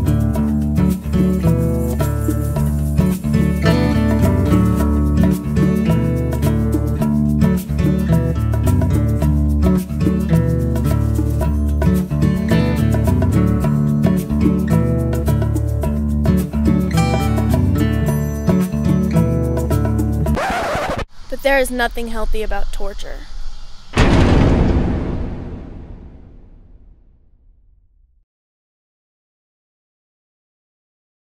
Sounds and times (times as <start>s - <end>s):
Speech: 21.3s - 23.3s.